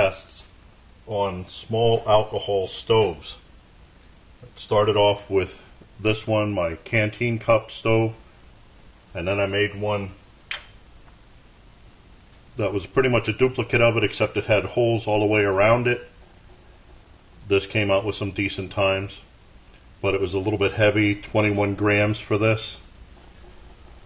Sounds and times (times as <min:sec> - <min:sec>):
Speech: 0:00.0 - 0:03.5, 0:04.4 - 0:08.2, 0:09.1 - 0:10.2, 0:12.6 - 0:16.2, 0:17.4 - 0:19.3, 0:20.0 - 0:22.9.